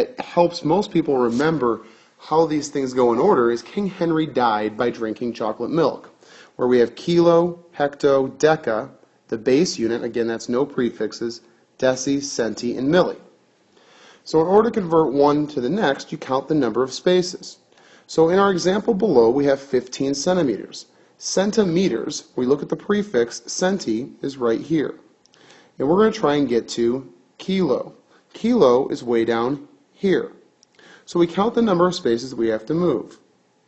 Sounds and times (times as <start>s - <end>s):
Speech: 0.0s - 13.3s, 14.2s - 25.1s, 25.8s - 30.4s, 31.1s - 33.3s.